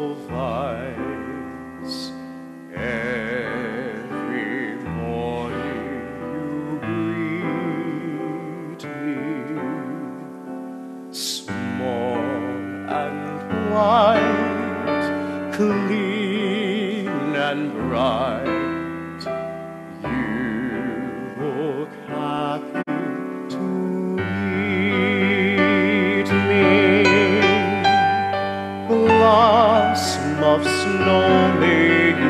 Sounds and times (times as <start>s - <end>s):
Music: 0.0s - 32.2s.